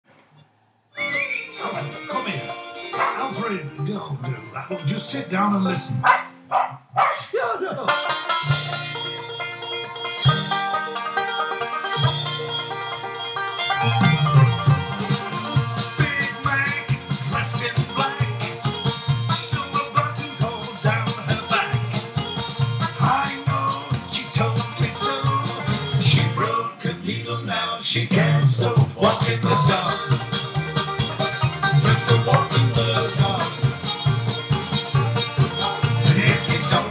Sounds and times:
Speech: 1.0s - 6.1s, 7.0s - 8.0s
Music: 1.0s - 6.8s, 7.4s - 36.9s.

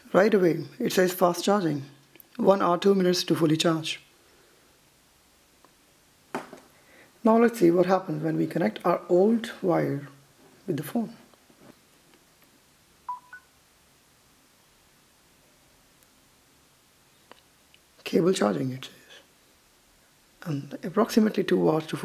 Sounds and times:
Speech: 0.0s - 4.1s, 7.2s - 11.3s, 18.0s - 19.3s, 20.4s - 22.0s.

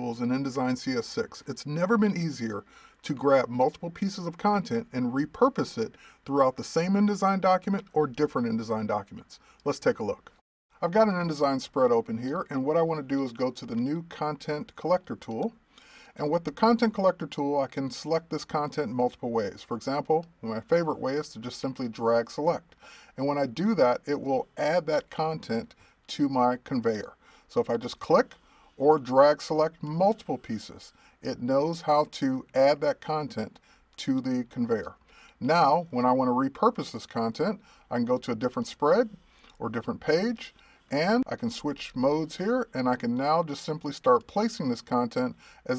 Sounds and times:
Speech: 0.0s - 45.7s.

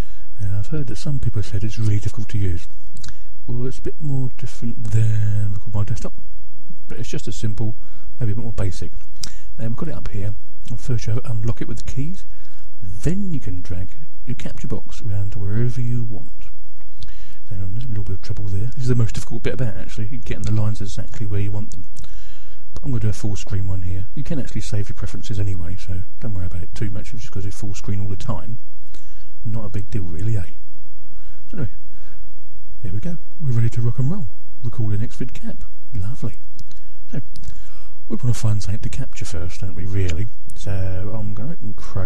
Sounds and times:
Speech: 0.4s - 2.7s, 3.5s - 6.2s, 6.9s - 9.0s, 9.6s - 12.3s, 12.9s - 16.6s, 17.4s - 21.8s, 22.8s - 28.6s, 29.4s - 30.6s, 31.5s - 31.8s, 32.8s - 36.5s, 37.1s - 37.4s, 38.1s - 42.0s.

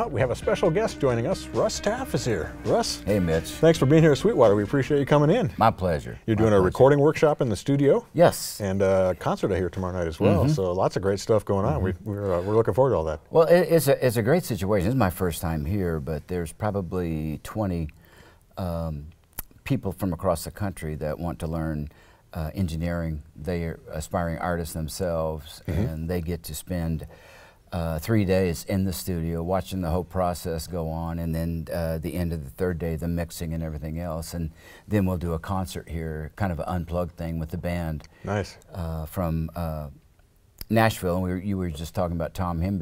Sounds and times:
Speech: 0.0s - 18.0s, 18.6s - 27.1s, 27.8s - 40.0s, 40.6s - 42.8s.

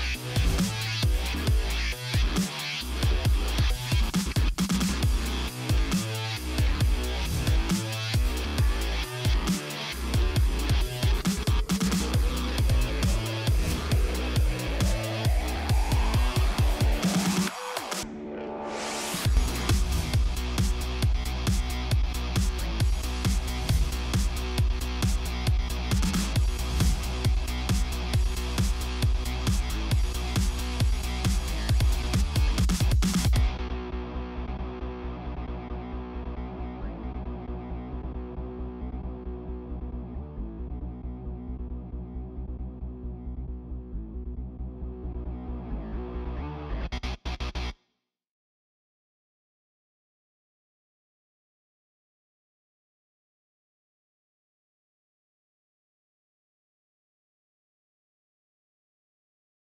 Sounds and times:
Music: 0.0s - 48.0s.

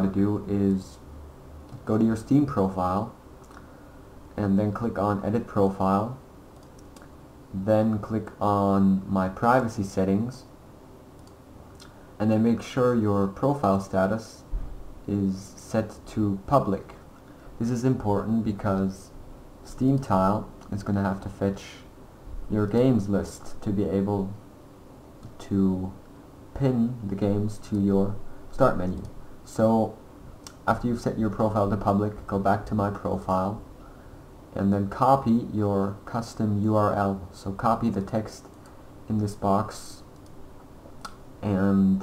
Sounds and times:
Speech: 0.0s - 1.1s, 1.8s - 3.2s, 4.4s - 6.2s, 7.5s - 10.5s, 12.2s - 14.5s, 15.1s - 17.0s, 17.6s - 21.9s, 22.5s - 24.4s, 25.3s - 33.7s, 34.5s - 38.5s, 39.1s - 40.1s, 41.4s - 42.0s.

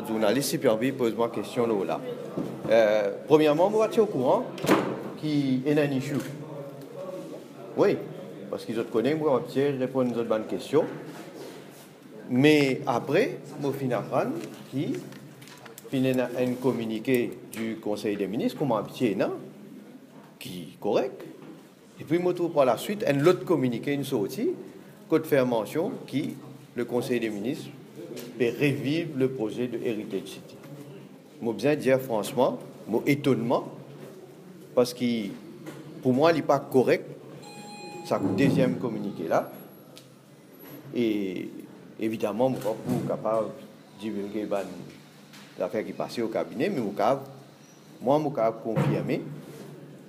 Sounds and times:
Speech: 0.0s - 4.6s, 5.2s - 11.2s, 12.1s - 15.1s, 15.8s - 19.5s, 20.4s - 21.3s, 22.0s - 33.8s, 34.8s - 35.4s, 36.0s - 37.1s, 38.1s - 39.6s, 40.9s - 44.9s, 45.6s - 47.4s, 48.0s - 49.4s.

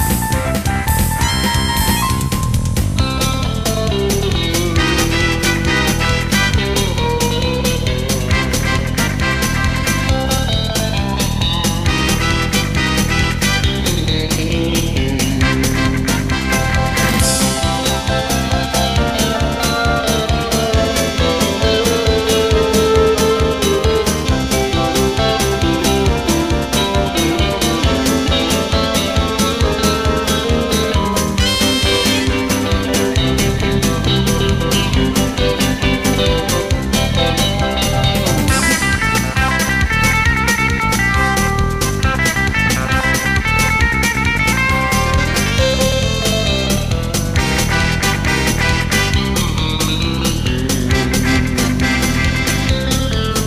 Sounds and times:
Background music: 0.0s - 53.4s.

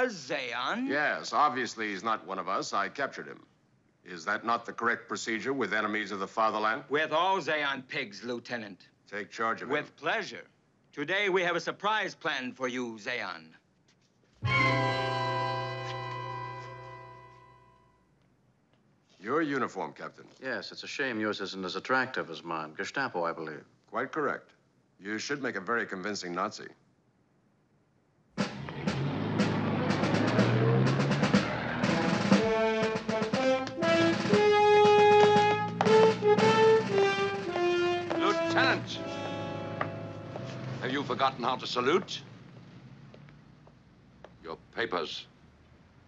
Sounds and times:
Speech: 0.0s - 3.5s, 4.1s - 13.6s, 19.2s - 26.8s, 40.8s - 42.3s, 44.4s - 45.3s.

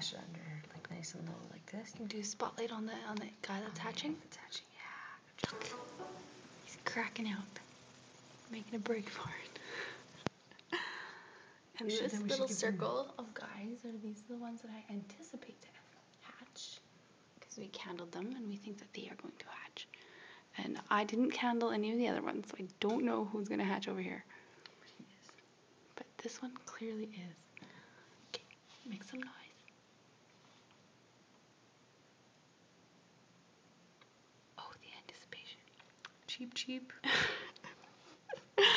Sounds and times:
Speech: 0.0s - 4.7s, 11.8s - 19.9s, 20.6s - 24.3s.

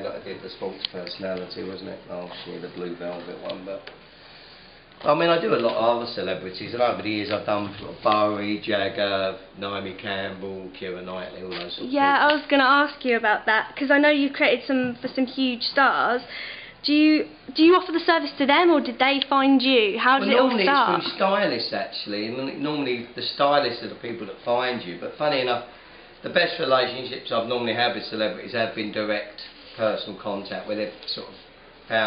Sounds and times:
Inside, small room: 0.0s - 32.0s.

